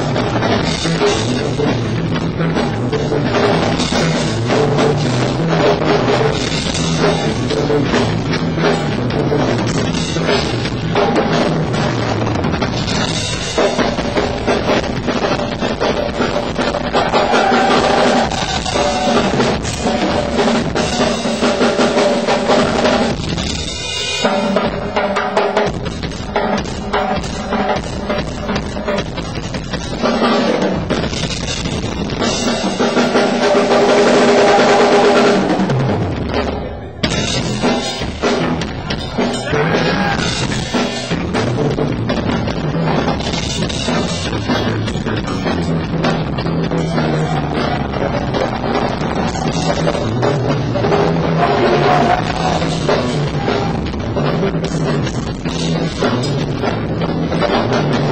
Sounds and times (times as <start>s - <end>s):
Bass guitar: 0.0s - 58.1s
Heavy metal: 0.0s - 58.1s.